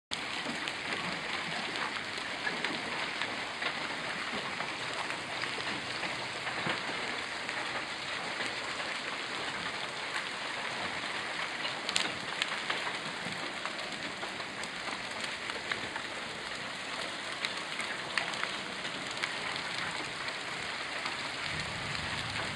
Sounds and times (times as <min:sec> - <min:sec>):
Rain: 0:00.1 - 0:22.5.